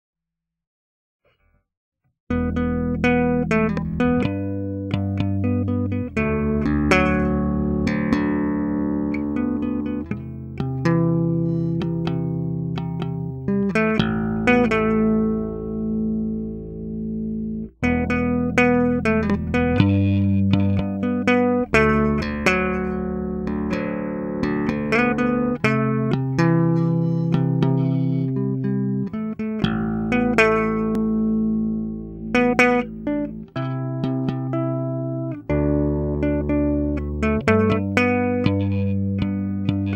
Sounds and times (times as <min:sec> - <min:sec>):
Electric guitar: 0:02.3 - 0:39.9
Electronic tuner: 0:02.3 - 0:39.9.